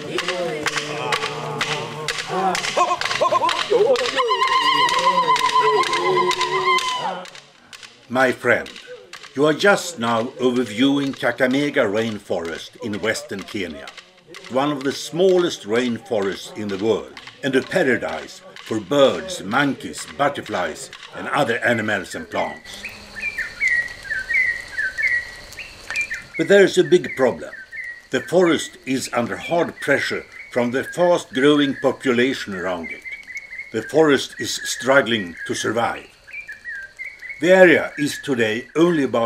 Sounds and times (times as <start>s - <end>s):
Speech: 8.1s - 22.8s, 26.4s - 27.6s, 28.2s - 33.0s, 33.8s - 36.1s, 37.4s - 39.2s.